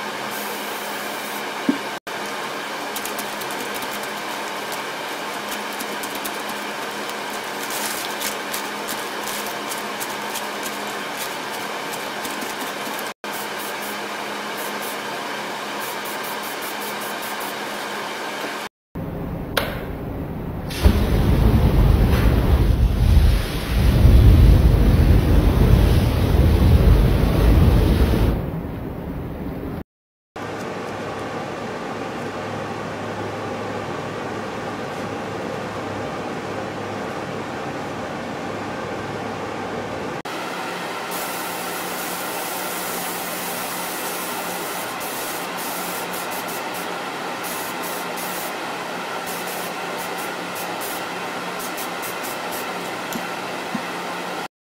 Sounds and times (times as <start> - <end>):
Spray: 0.3 - 1.5, 2.9 - 15.1, 15.7 - 18.0, 20.7 - 21.1, 23.1 - 23.9, 41.0 - 52.9.